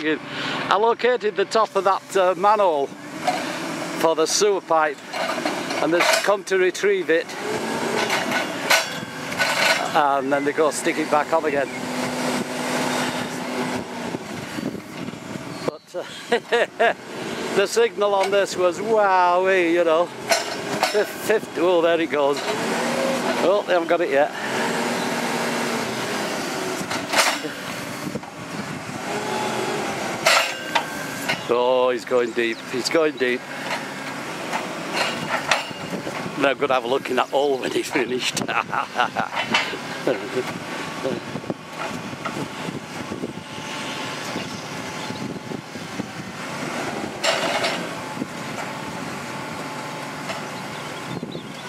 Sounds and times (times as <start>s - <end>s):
Speech: 0.0s - 3.0s, 4.0s - 5.0s, 5.8s - 7.4s, 9.8s - 11.8s, 15.7s - 16.1s, 17.6s - 20.1s, 20.9s - 22.4s, 23.4s - 24.4s, 31.5s - 33.4s, 36.4s - 39.2s, 40.0s - 41.2s
Truck: 0.0s - 51.6s.